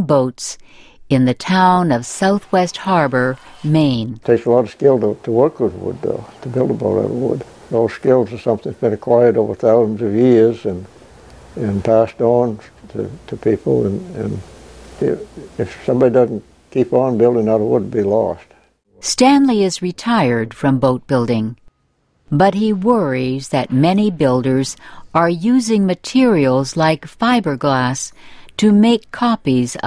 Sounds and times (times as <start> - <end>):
Speech: 0.0 - 10.9, 11.6 - 14.4, 15.0 - 21.6, 22.4 - 29.8.